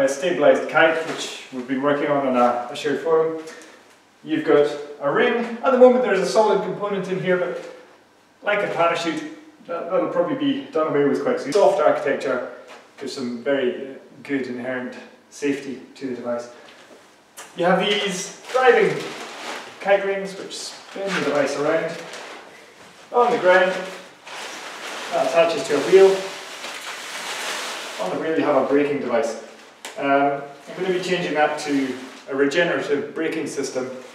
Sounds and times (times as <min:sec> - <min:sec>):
Speech: 0:00.0 - 0:03.6, 0:04.2 - 0:07.8, 0:08.4 - 0:16.6, 0:17.4 - 0:19.2, 0:19.8 - 0:22.1, 0:23.1 - 0:24.1, 0:25.1 - 0:26.4, 0:28.0 - 0:34.0.